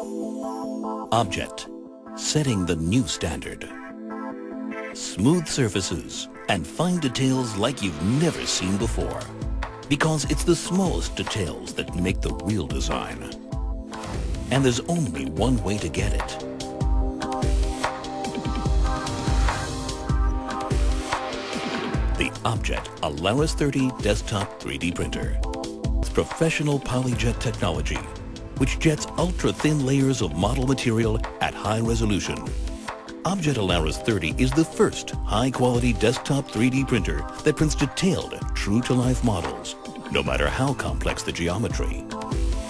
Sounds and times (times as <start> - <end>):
Music: 0.0 - 42.7
Speech: 1.1 - 3.8, 5.0 - 9.3, 9.9 - 13.4, 14.5 - 16.5, 22.2 - 32.5, 33.2 - 42.1.